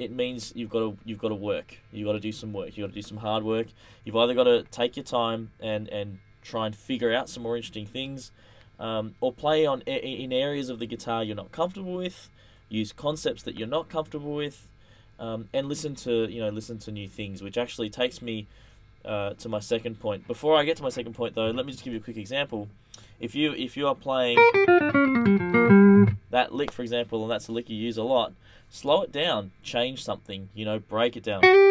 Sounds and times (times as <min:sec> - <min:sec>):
Speech: 0:00.0 - 0:24.4, 0:26.3 - 0:31.4
Guitar: 0:24.3 - 0:26.4, 0:31.4 - 0:31.7
Electronic tuner: 0:24.4 - 0:26.4, 0:31.4 - 0:31.7.